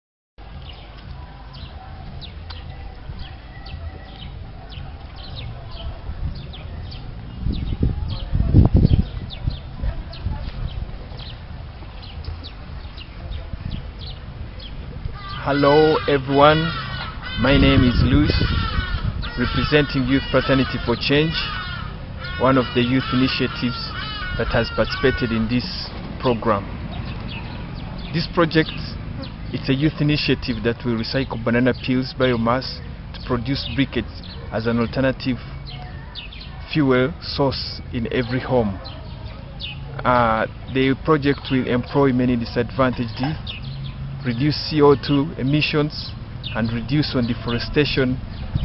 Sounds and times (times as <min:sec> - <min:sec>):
Bird: 0:00.6 - 0:48.6.